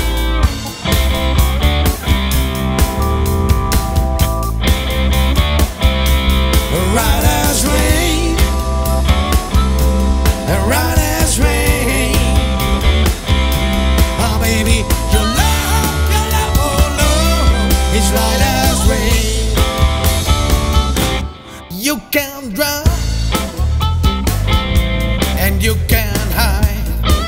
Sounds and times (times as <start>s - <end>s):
Music: 0.0s - 27.2s.